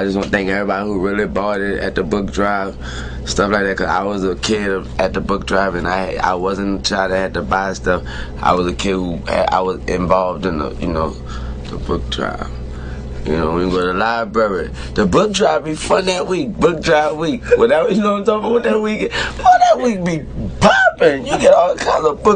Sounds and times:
Speech: 0.0 - 12.6, 13.2 - 22.3.

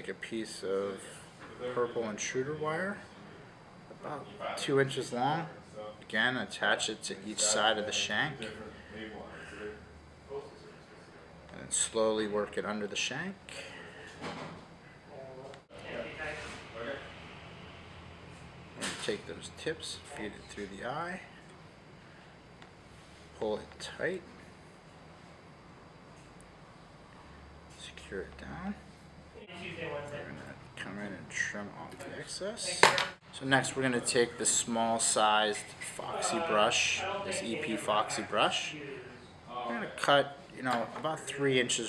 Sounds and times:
Speech: 0.0 - 3.1, 4.0 - 10.8, 11.5 - 13.6, 18.8 - 21.3, 27.7 - 41.8.

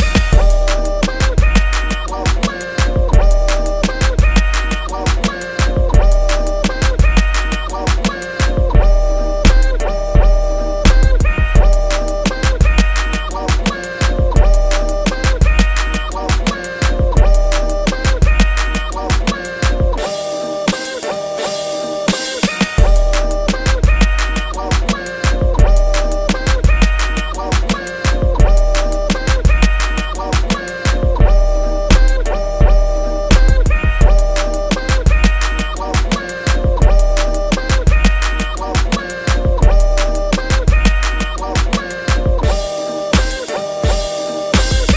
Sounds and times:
Hip hop music: 0.0 - 44.9.

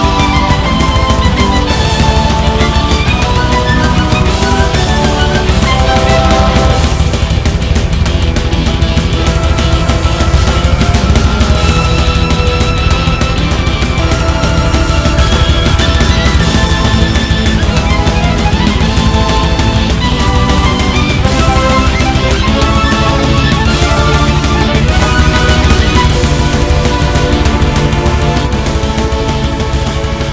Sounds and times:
Music: 0.0 - 30.3.

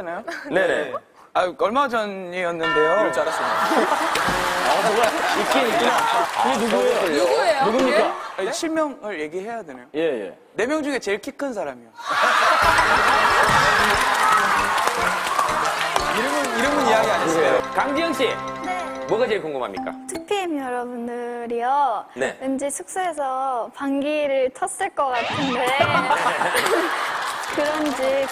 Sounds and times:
Music: 12.6 - 20.7.

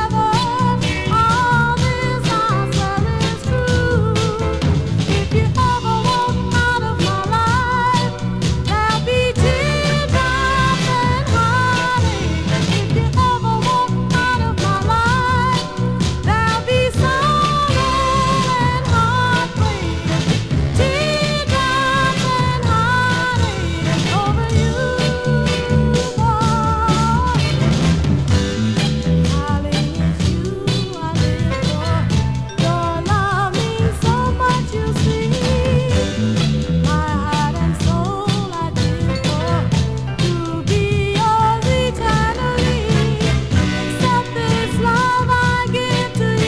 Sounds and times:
Music: 0.0 - 46.4.

